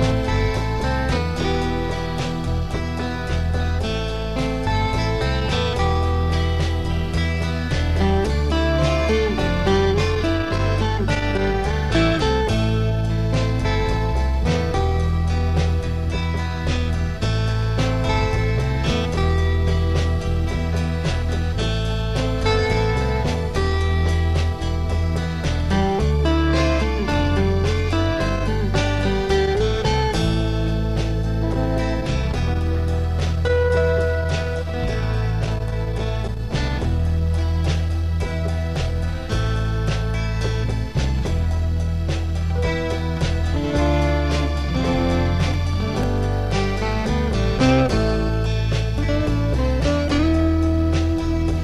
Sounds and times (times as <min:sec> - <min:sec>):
Music: 0:00.0 - 0:51.6.